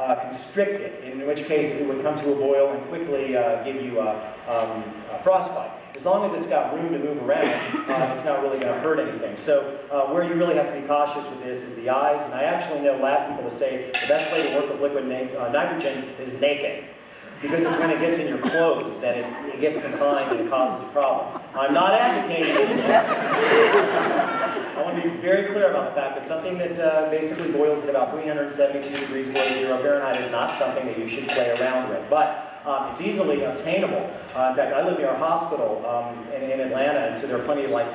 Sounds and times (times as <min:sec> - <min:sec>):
Speech: 0:00.0 - 0:22.8, 0:24.7 - 0:37.9.